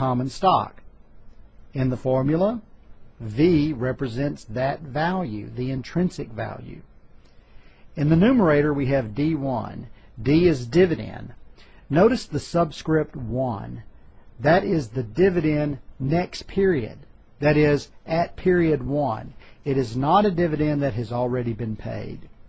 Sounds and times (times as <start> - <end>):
Speech: 0.0 - 0.8, 1.7 - 6.9, 8.0 - 22.4.